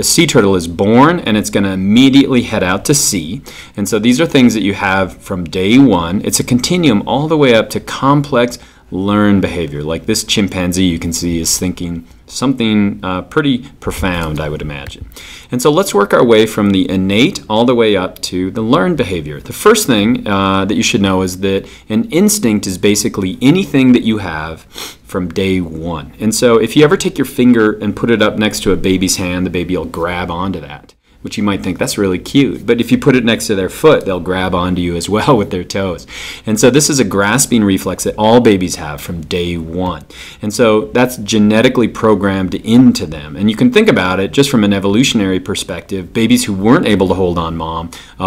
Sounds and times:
Speech: 0.0 - 48.2.

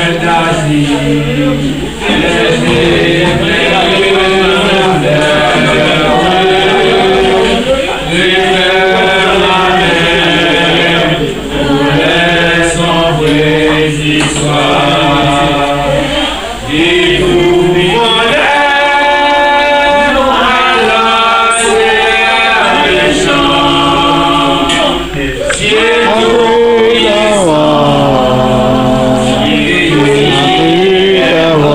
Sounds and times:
Male singing: 0.0 - 31.7.

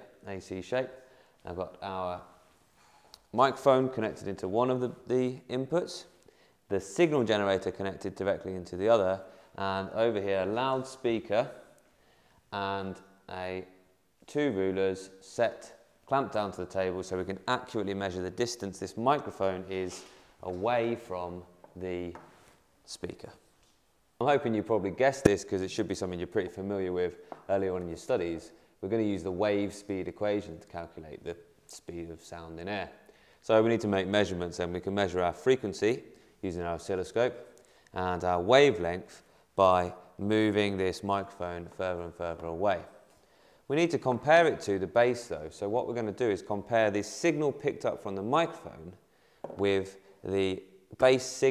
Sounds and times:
Speech: 0.0 - 2.4, 3.3 - 11.7, 12.5 - 22.2, 22.8 - 23.4, 24.2 - 43.0, 43.7 - 51.5.

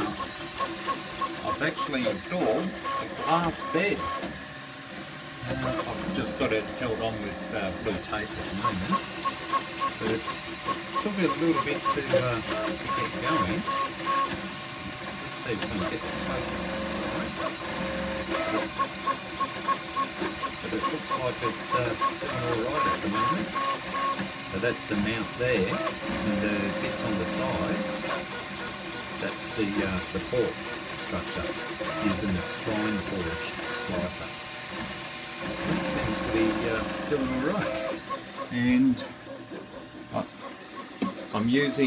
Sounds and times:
Speech: 1.4 - 4.1, 5.4 - 9.0, 10.0 - 10.3, 11.0 - 13.7, 15.2 - 16.8, 20.6 - 23.5, 24.5 - 28.1, 29.2 - 34.3, 35.6 - 37.9, 38.5 - 39.1, 40.1 - 40.3, 41.4 - 41.8.

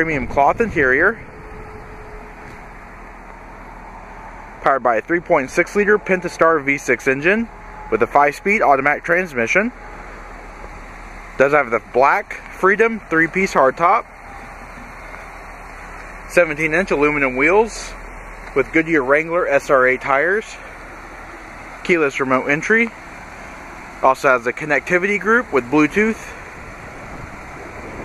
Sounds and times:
Speech: 0.0 - 1.2, 4.6 - 9.8, 11.4 - 14.1, 16.3 - 20.7, 21.8 - 23.0, 24.0 - 26.4.

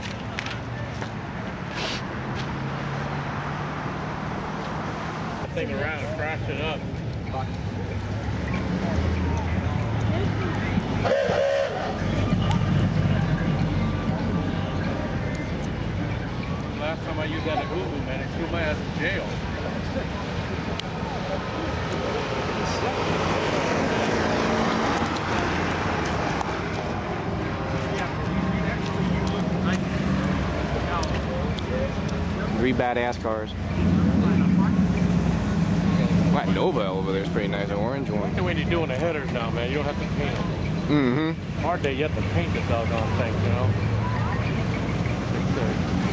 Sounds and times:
Car: 0.0 - 46.1.

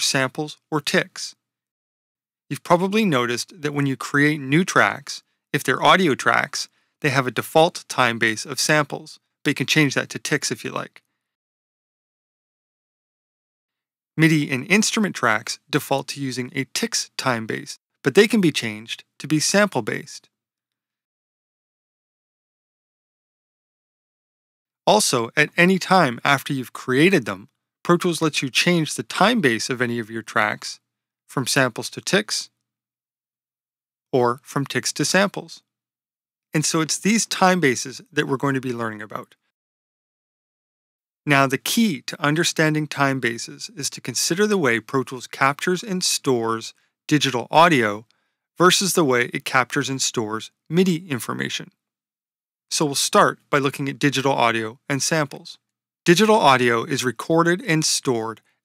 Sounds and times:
Speech: 0.0 - 1.4, 2.5 - 11.1, 14.2 - 20.3, 24.9 - 32.6, 34.1 - 35.7, 36.5 - 39.4, 41.2 - 51.8, 52.7 - 58.4.

